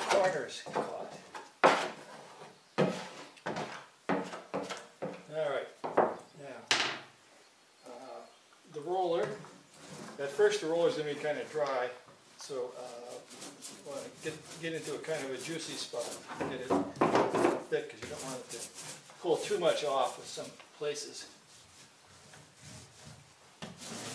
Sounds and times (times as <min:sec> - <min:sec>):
Speech: 0:00.0 - 0:01.3, 0:07.9 - 0:09.4, 0:10.2 - 0:16.9, 0:17.7 - 0:21.4
Wood: 0:00.0 - 0:07.1, 0:13.1 - 0:20.5.